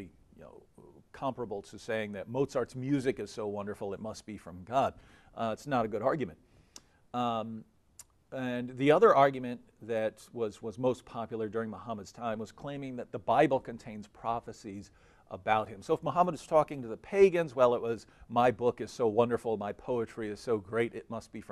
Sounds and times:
Speech: 0.0 - 6.4, 7.2 - 7.7, 8.4 - 21.5.

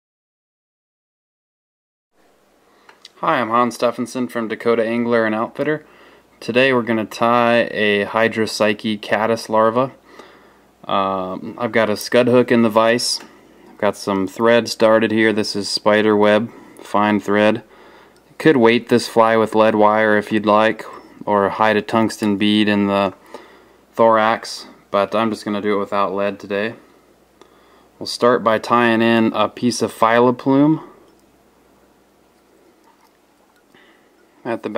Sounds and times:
Speech: 3.2 - 10.0, 10.8 - 17.7, 18.4 - 23.2, 24.0 - 26.9, 28.0 - 31.0, 34.4 - 34.7.

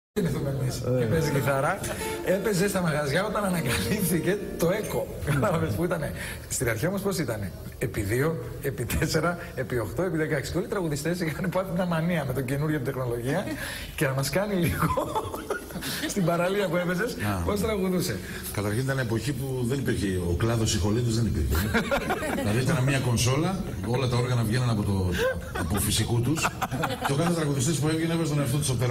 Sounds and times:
Music: 0.8 - 5.7.

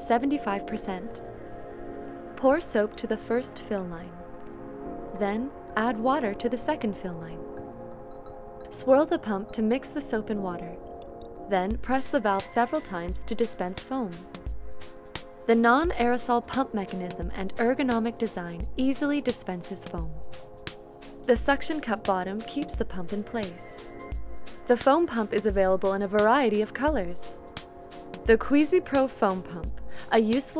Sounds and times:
Speech: 0.0 - 1.2, 2.4 - 4.2, 5.2 - 7.4, 8.8 - 10.8, 11.5 - 14.2, 15.5 - 20.2, 21.3 - 23.7, 24.7 - 27.2, 28.3 - 30.5
Music: 0.0 - 30.5.

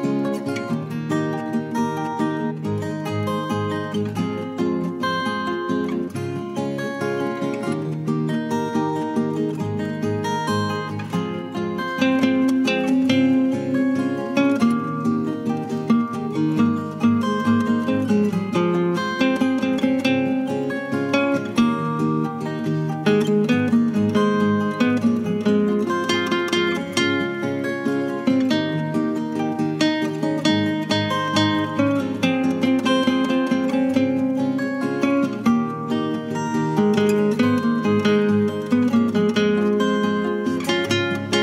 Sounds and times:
Acoustic guitar: 0.0 - 41.4.

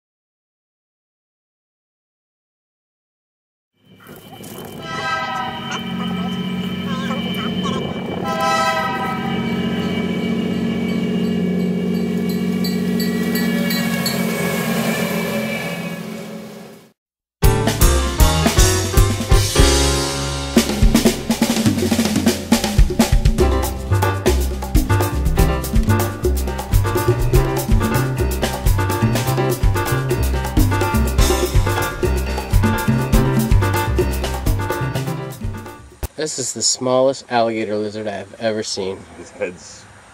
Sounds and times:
Speech: 5.7 - 8.0, 36.2 - 39.9
Music: 17.4 - 36.1.

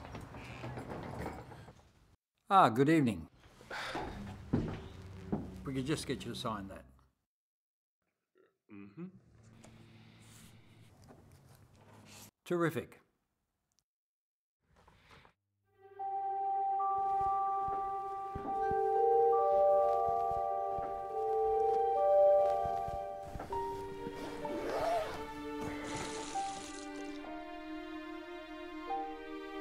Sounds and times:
Speech: 2.5 - 3.3, 5.7 - 7.0, 12.4 - 13.1
Music: 15.7 - 29.6.

